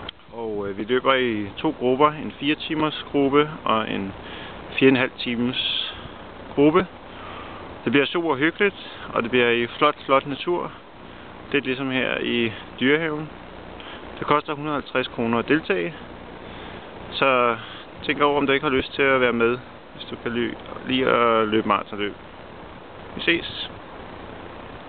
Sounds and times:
Outside, rural or natural: 0.0s - 24.8s
Male speech, man speaking: 0.3s - 4.2s, 4.8s - 6.0s, 6.6s - 6.9s, 7.9s - 10.8s, 11.5s - 13.3s, 14.2s - 16.0s, 17.1s - 22.2s, 23.2s - 23.8s.

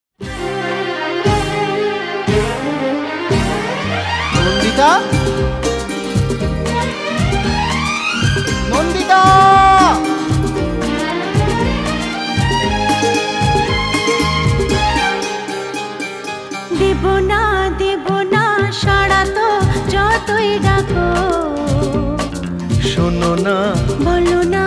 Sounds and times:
Music of Bollywood: 0.2s - 24.6s.

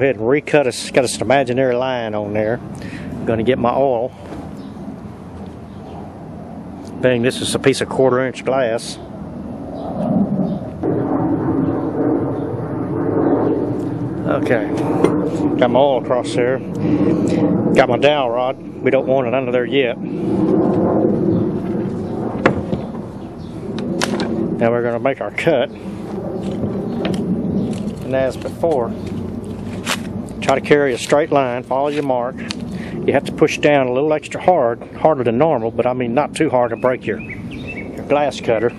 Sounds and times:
Speech: 0.0s - 2.6s, 3.3s - 4.1s, 7.0s - 9.0s, 14.3s - 14.8s, 15.6s - 16.7s, 17.8s - 20.0s, 24.6s - 25.7s, 28.1s - 29.0s, 30.4s - 32.5s, 33.1s - 37.2s, 38.1s - 38.7s.

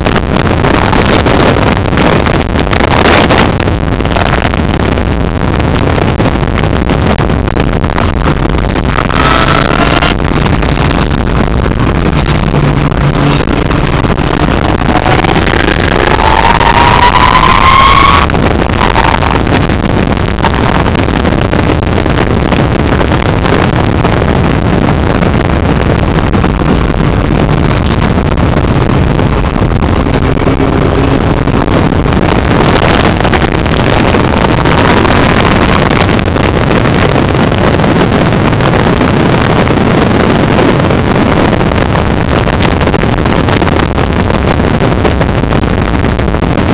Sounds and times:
Car: 0.0s - 46.7s.

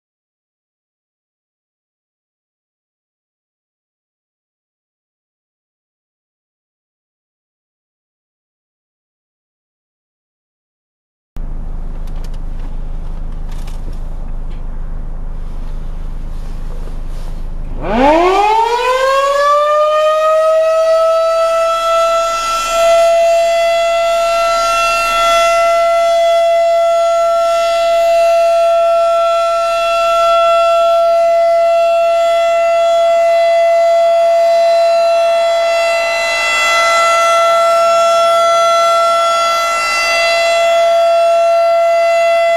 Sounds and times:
Civil defense siren: 17.7s - 42.5s.

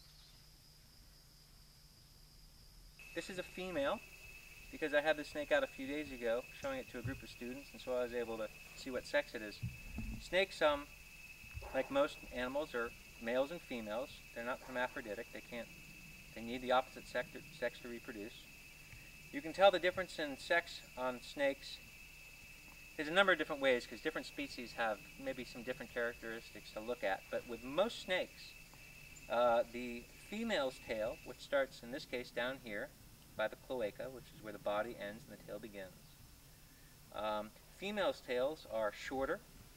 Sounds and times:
Outside, rural or natural: 0.0s - 39.7s
Speech: 3.2s - 4.0s, 4.8s - 9.6s, 10.2s - 10.9s, 11.6s - 15.7s, 16.4s - 18.5s, 19.4s - 21.8s, 23.0s - 28.6s, 29.3s - 36.0s, 37.1s - 39.4s.

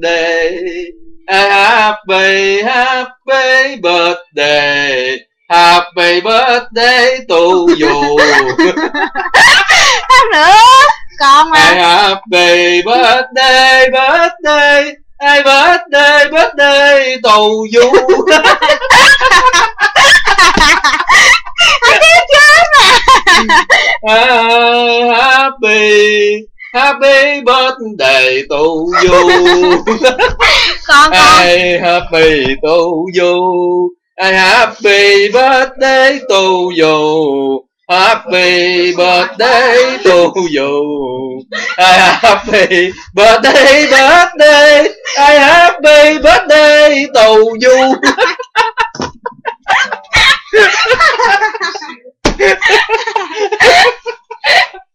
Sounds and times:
Male singing: 0.0s - 9.3s, 10.1s - 19.6s, 21.8s - 48.4s
Speech: 7.4s - 13.2s, 17.7s - 19.9s, 21.5s - 25.2s, 28.6s - 33.6s, 36.2s - 43.8s, 47.4s - 54.8s.

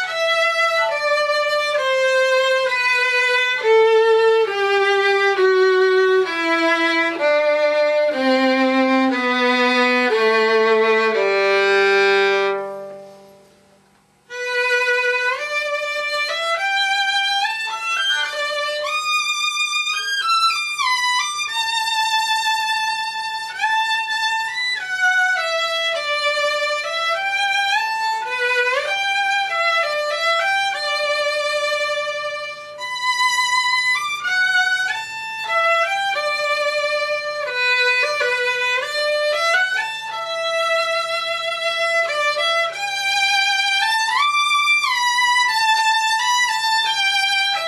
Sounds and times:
Violin, fiddle: 0.0s - 13.2s, 14.3s - 47.6s.

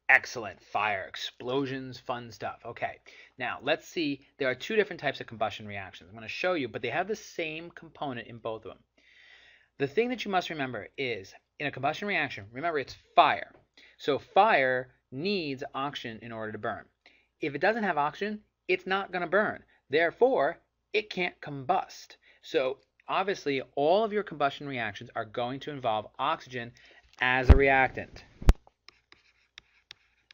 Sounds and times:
Speech: 0.0s - 8.8s, 9.8s - 28.3s.

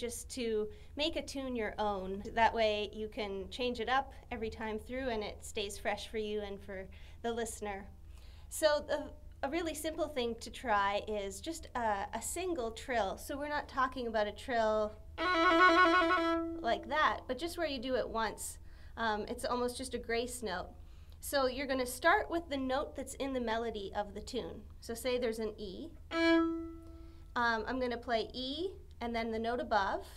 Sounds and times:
Speech: 0.0s - 15.0s, 16.6s - 26.0s, 27.4s - 30.1s
Violin, fiddle: 15.2s - 16.6s, 26.1s - 27.0s.

